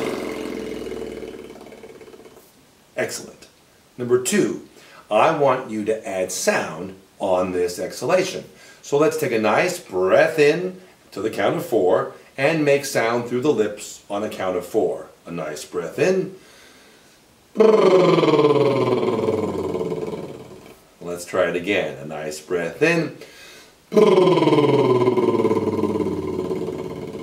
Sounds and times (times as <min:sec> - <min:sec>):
Speech: 0:03.0 - 0:16.4, 0:17.6 - 0:23.2, 0:23.9 - 0:27.2
Breathing: 0:04.7 - 0:05.1, 0:08.5 - 0:08.8, 0:16.4 - 0:17.3, 0:23.2 - 0:23.8.